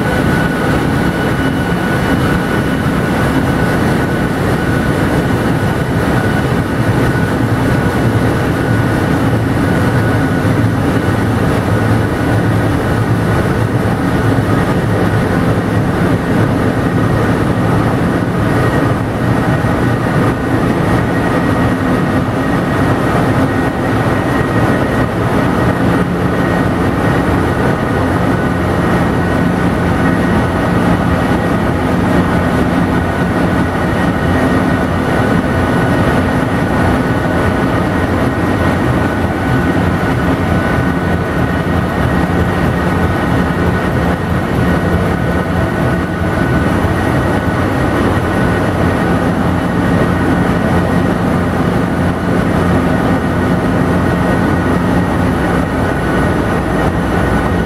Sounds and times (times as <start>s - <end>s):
Heavy engine (low frequency): 0.0s - 57.6s.